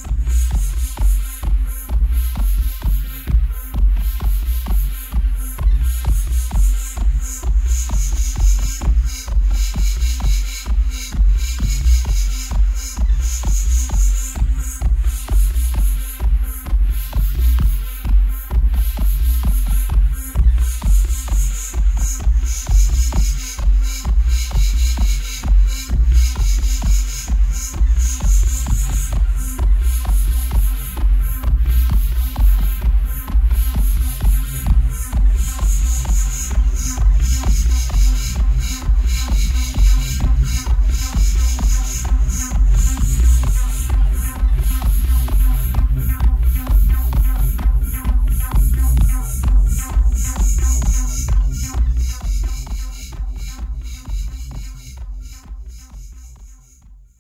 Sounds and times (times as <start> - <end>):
Music: 0.0 - 57.2.